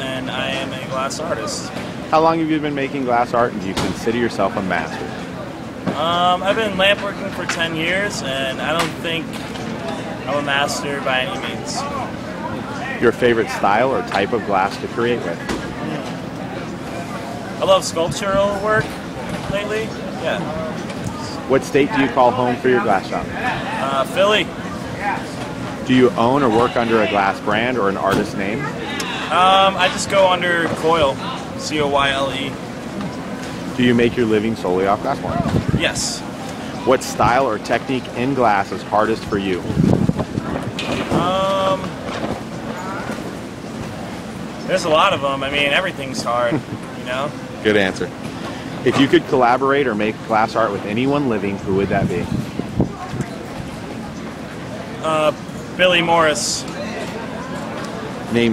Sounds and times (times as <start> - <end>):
Speech: 0.0 - 5.2, 5.9 - 9.4, 10.0 - 16.1, 25.9 - 32.6, 41.1 - 42.0, 48.8 - 52.4.